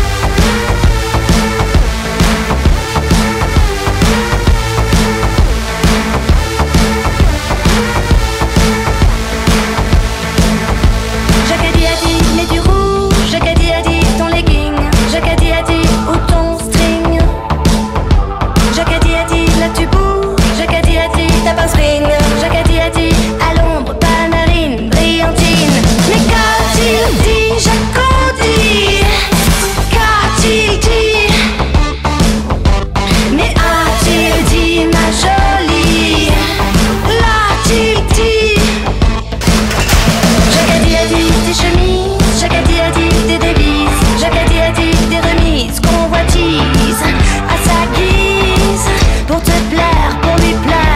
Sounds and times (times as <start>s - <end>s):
Music: 0.0s - 50.9s.